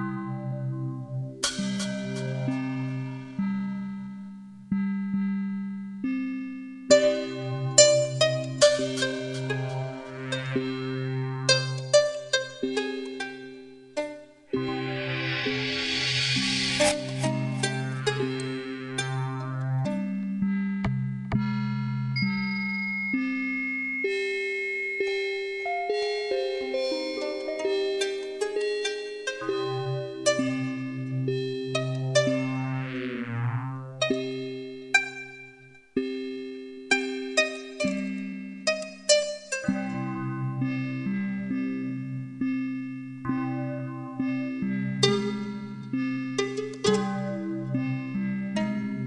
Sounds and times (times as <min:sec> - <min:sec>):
Glockenspiel: 0:06.9 - 0:19.2, 0:22.1 - 0:32.9, 0:34.0 - 0:49.0.